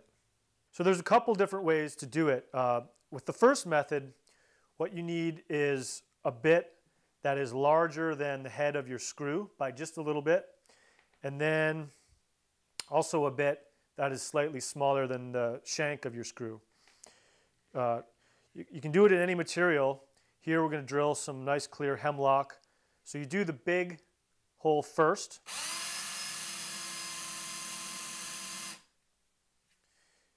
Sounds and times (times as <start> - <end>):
Speech: 0.8 - 4.1, 4.8 - 10.5, 11.2 - 11.9, 12.8 - 16.6, 17.8 - 25.4.